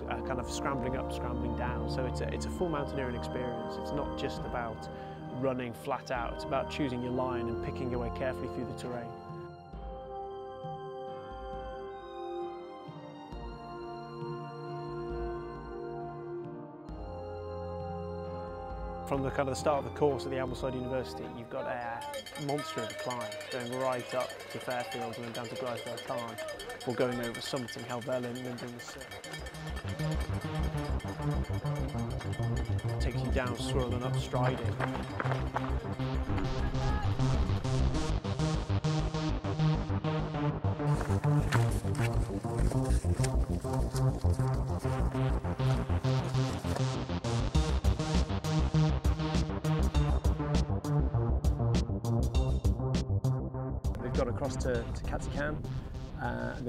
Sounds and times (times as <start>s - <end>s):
Speech: 0.0s - 9.2s, 19.1s - 29.1s, 33.0s - 34.8s, 54.0s - 55.6s, 56.2s - 56.6s
Music: 0.0s - 56.6s.